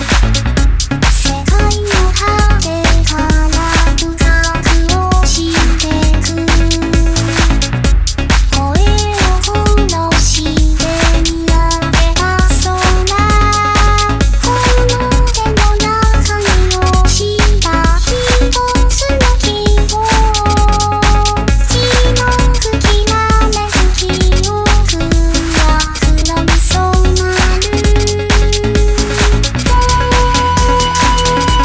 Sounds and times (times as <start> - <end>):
Music: 0.0 - 31.6.